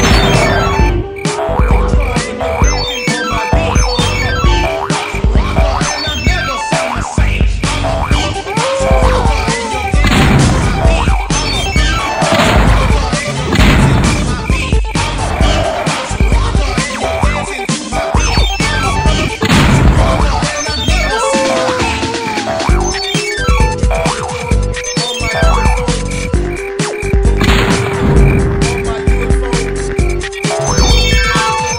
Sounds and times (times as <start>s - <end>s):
Music: 0.0s - 31.7s.